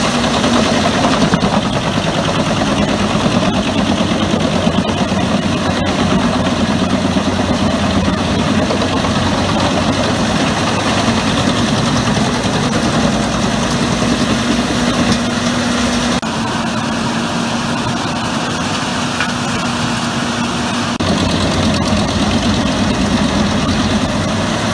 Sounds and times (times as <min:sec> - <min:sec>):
Heavy engine (low frequency): 0:00.0 - 0:24.7
Vehicle: 0:00.0 - 0:24.7.